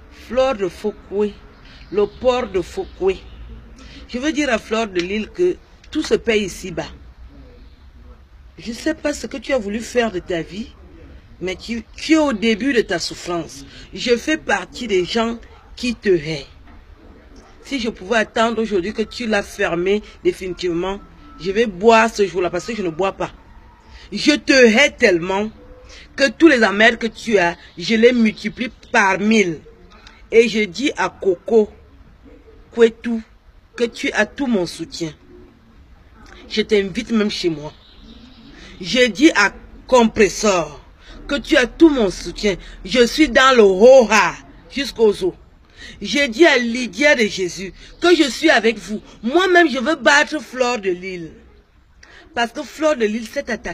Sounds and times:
Speech: 0:00.0 - 0:31.9, 0:32.7 - 0:35.3, 0:36.1 - 0:37.8, 0:38.6 - 0:53.7.

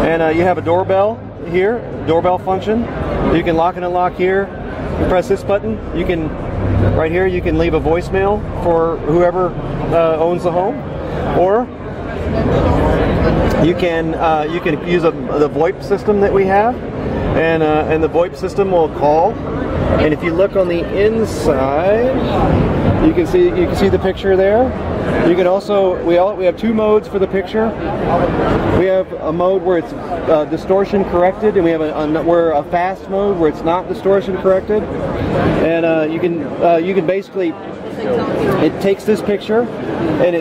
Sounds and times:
Speech: 0:00.0 - 0:19.4, 0:20.0 - 0:34.9, 0:35.5 - 0:40.4.

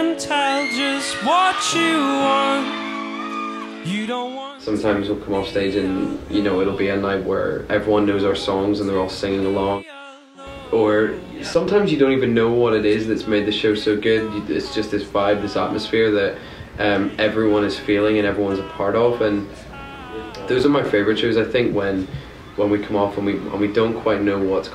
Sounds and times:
Speech: 0:04.6 - 0:09.9, 0:10.5 - 0:24.7.

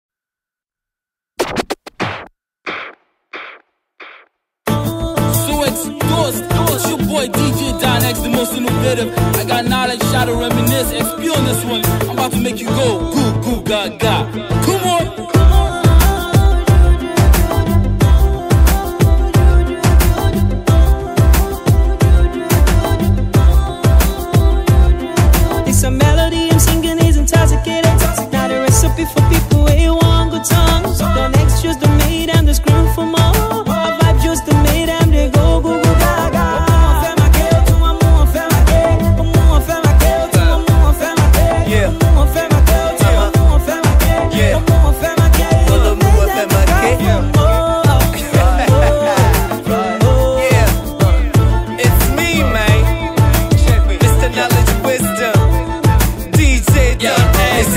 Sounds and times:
Music: 0:04.7 - 0:57.7.

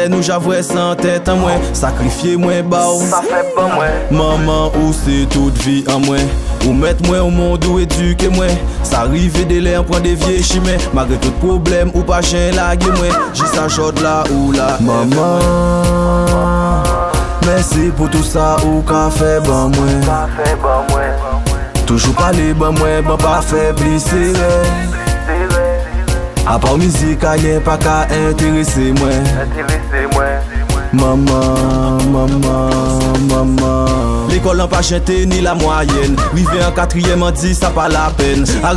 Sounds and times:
Music: 0:00.0 - 0:38.7.

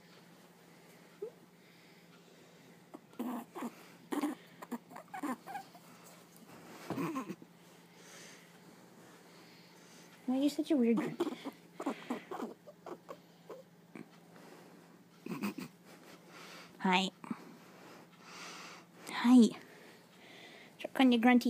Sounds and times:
Domestic animals, pets: 0:02.9 - 0:06.2, 0:06.8 - 0:07.4, 0:10.9 - 0:14.2, 0:15.2 - 0:16.2
Speech: 0:10.3 - 0:11.2, 0:16.8 - 0:17.1, 0:19.1 - 0:19.6, 0:20.8 - 0:21.4.

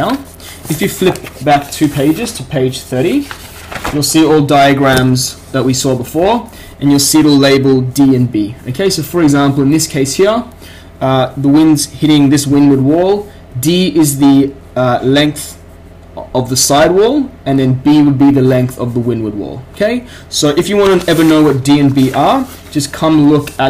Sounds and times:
Speech: 0:00.0 - 0:03.3, 0:03.9 - 0:15.6, 0:16.2 - 0:23.6.

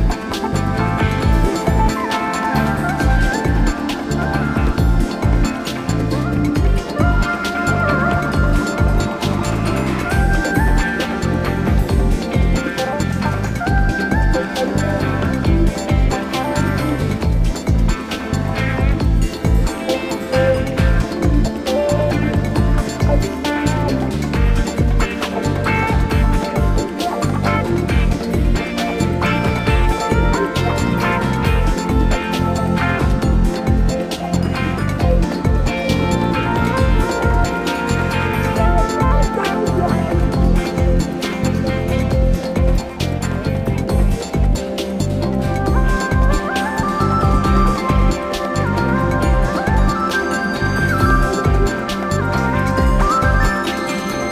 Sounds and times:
Background music: 0:00.0 - 0:54.3.

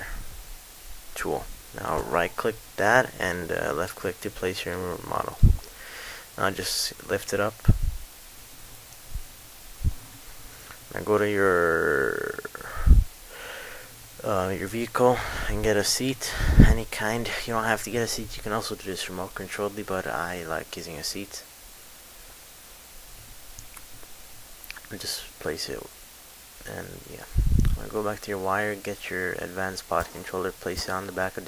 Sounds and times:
Speech: 0:01.2 - 0:05.4, 0:06.4 - 0:07.8, 0:10.9 - 0:12.6, 0:14.2 - 0:21.5, 0:24.7 - 0:25.9, 0:26.6 - 0:31.4.

